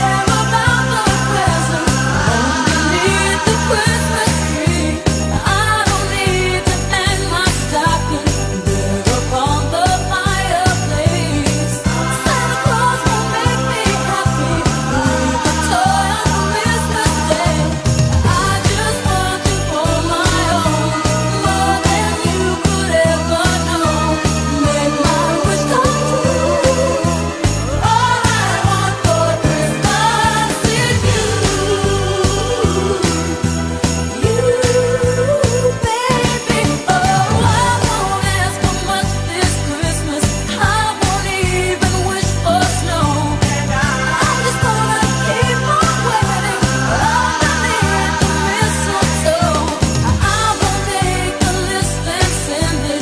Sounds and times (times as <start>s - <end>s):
Jingle bell: 0.0s - 53.0s.